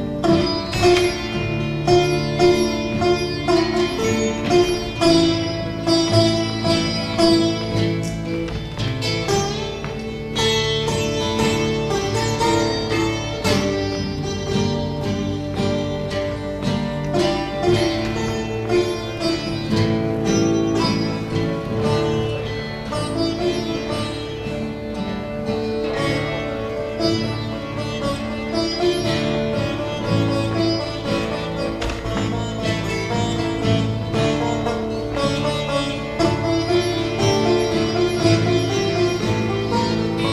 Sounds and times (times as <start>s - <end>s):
Guitar: 0.0s - 40.3s
Sitar: 0.0s - 40.3s.